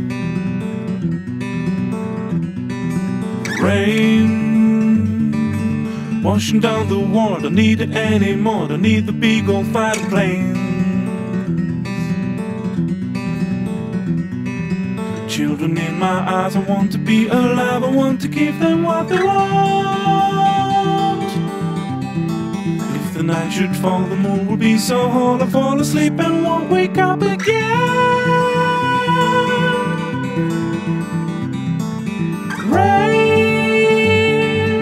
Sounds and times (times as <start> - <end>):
Music: 0.0 - 34.8.